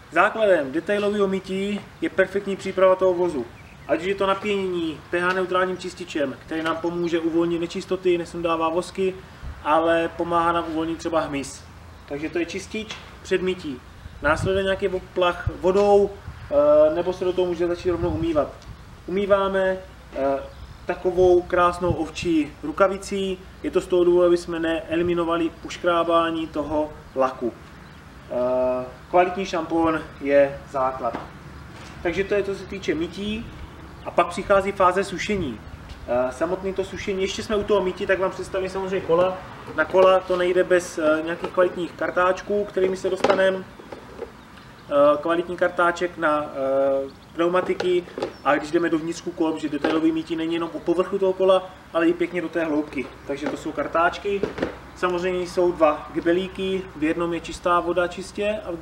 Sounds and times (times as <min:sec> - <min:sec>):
Speech: 0:00.1 - 0:27.6, 0:28.3 - 0:31.3, 0:32.0 - 0:43.7, 0:44.9 - 0:58.8.